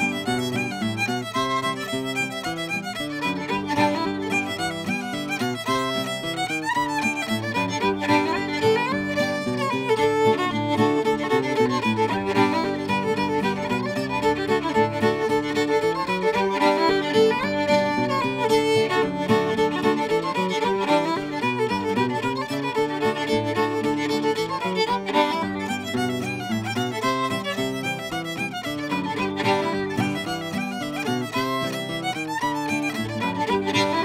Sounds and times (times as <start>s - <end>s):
Music: 0.0s - 34.0s.